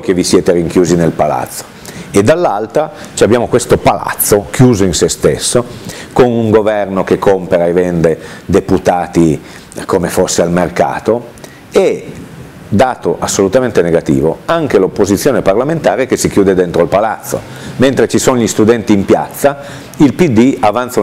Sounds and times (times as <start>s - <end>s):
Speech: 0.0s - 21.0s.